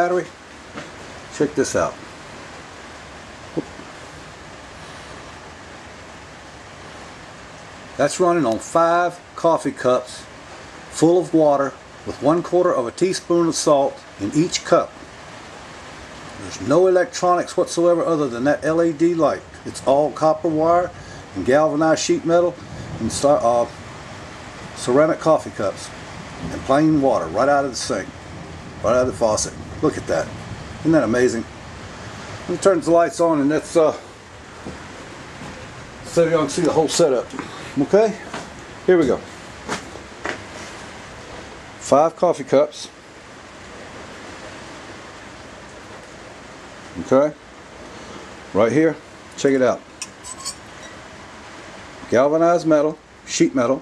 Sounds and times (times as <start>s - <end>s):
Speech: 0.0s - 0.4s, 1.3s - 2.0s, 8.0s - 10.3s, 10.9s - 15.0s, 16.4s - 23.8s, 24.8s - 28.1s, 28.8s - 31.5s, 32.5s - 34.1s, 36.1s - 39.3s, 41.8s - 43.0s, 47.0s - 47.4s, 48.5s - 49.9s, 52.1s - 53.8s.